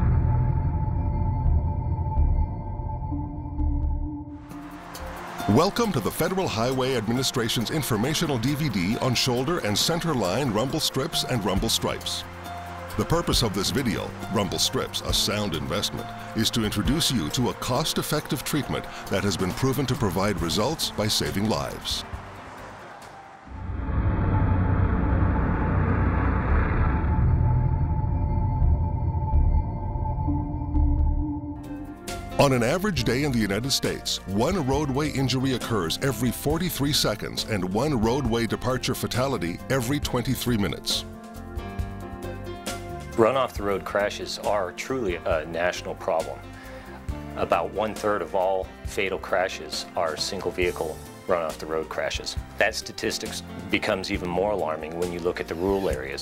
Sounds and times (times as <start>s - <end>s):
Rumble: 0.0s - 4.4s, 23.5s - 31.6s
Music: 0.0s - 56.2s
Speech: 5.5s - 12.2s, 13.0s - 22.0s, 32.4s - 41.1s, 43.2s - 46.4s, 47.4s - 56.2s.